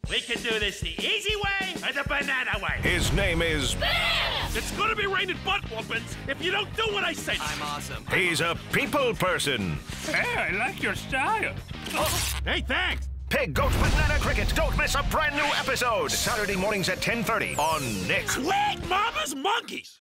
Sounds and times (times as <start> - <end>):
Music: 0.0 - 20.0
Speech: 0.1 - 3.8, 4.6 - 20.0.